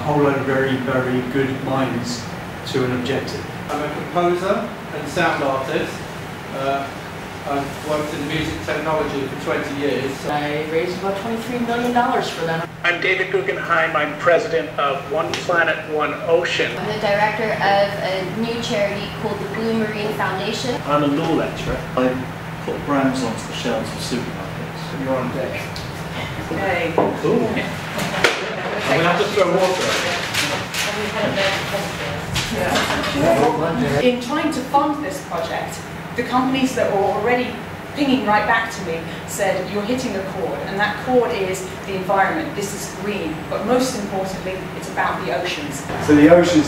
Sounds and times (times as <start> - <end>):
Speech: 7.5 - 25.7, 28.8 - 46.6.